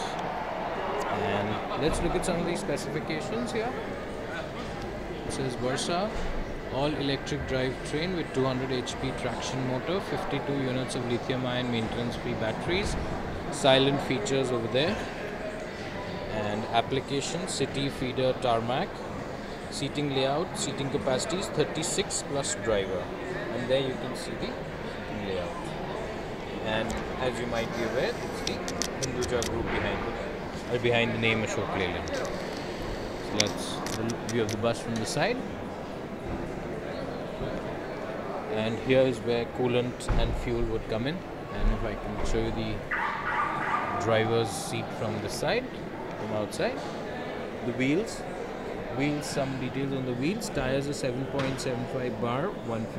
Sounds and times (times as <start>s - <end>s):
Speech: 1.0s - 4.4s, 5.2s - 15.1s, 16.3s - 18.9s, 19.7s - 25.7s, 26.6s - 32.3s, 33.2s - 35.4s, 38.5s - 42.8s, 43.6s - 48.3s, 48.9s - 52.9s.